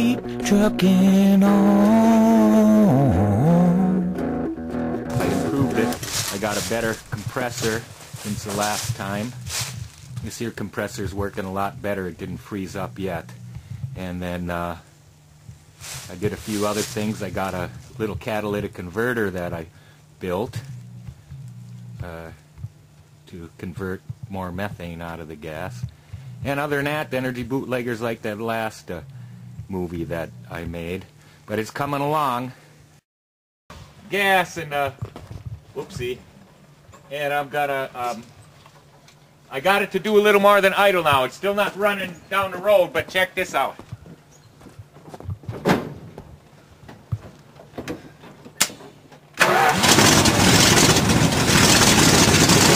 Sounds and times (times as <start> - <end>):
Speech: 5.2 - 13.3, 14.0 - 14.9, 16.1 - 20.7, 22.0 - 22.4, 23.3 - 29.0, 29.7 - 32.6, 34.0 - 35.0, 35.8 - 36.2, 37.1 - 38.3, 39.5 - 43.8.